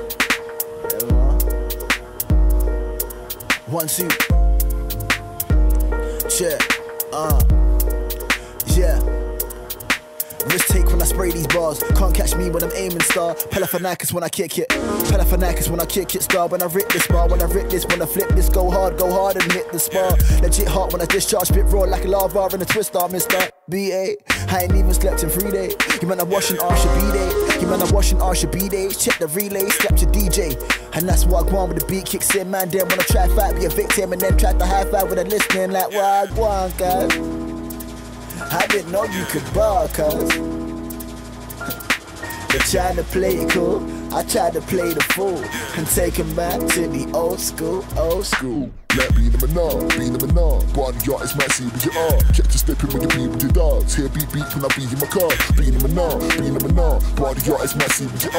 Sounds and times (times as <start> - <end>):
Music: 0.0 - 58.3.